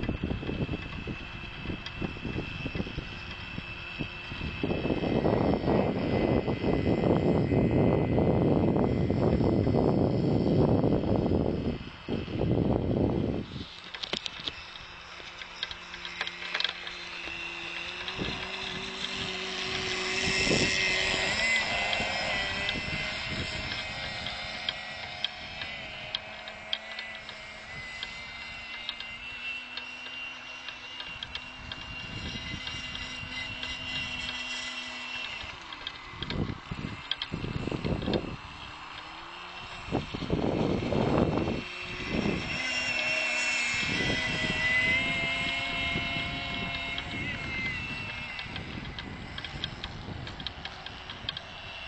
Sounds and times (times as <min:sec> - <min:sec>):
Sailboat, sailing ship: 0:00.0 - 0:05.2, 0:11.5 - 0:18.8.